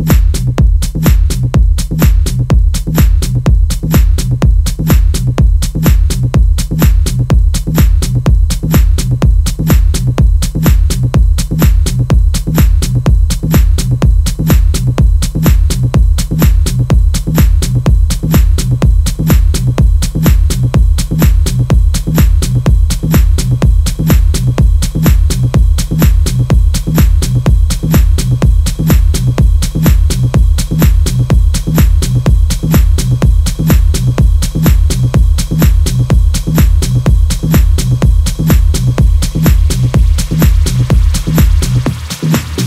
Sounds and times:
Music: 0:00.0 - 0:42.6.

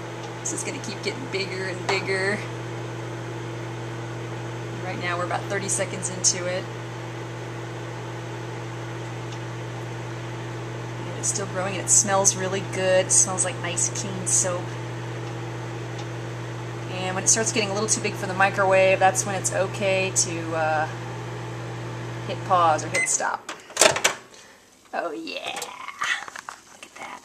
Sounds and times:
Microwave oven: 0:00.0 - 0:24.6
Speech: 0:00.5 - 0:02.5, 0:04.8 - 0:06.7, 0:11.0 - 0:14.8, 0:16.9 - 0:21.0, 0:22.3 - 0:23.5, 0:25.0 - 0:27.2
Inside, small room: 0:22.4 - 0:27.2.

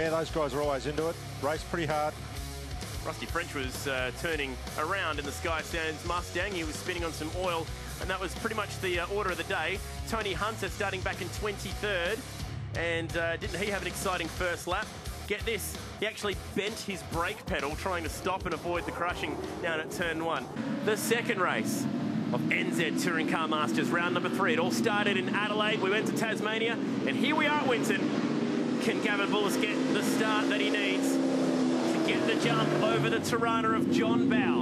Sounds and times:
Speech: 0:00.0 - 0:02.2, 0:03.0 - 0:12.2, 0:12.8 - 0:28.1, 0:28.8 - 0:31.2, 0:32.0 - 0:34.6
Music: 0:00.0 - 0:21.7
Car passing by: 0:18.4 - 0:33.4.

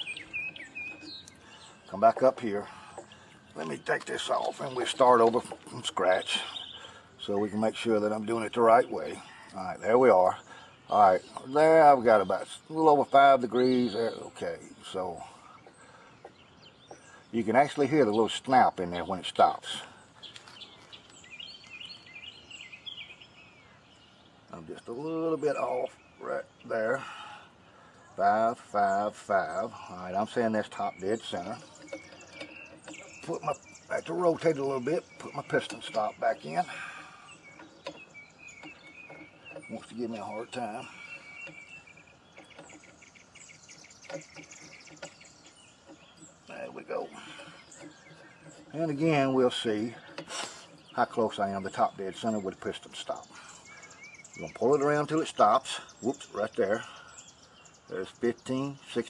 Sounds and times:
Chirp, tweet: 0:00.0 - 0:59.0.

